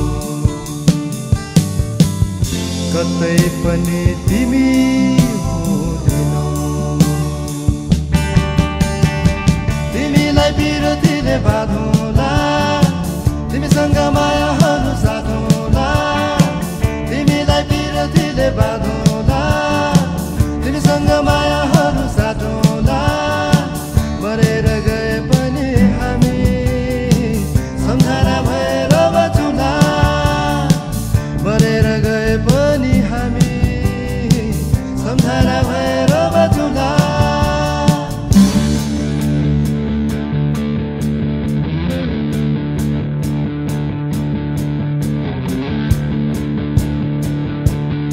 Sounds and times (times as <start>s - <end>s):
Electric guitar: 0.0s - 48.1s
Progressive rock: 0.0s - 48.1s.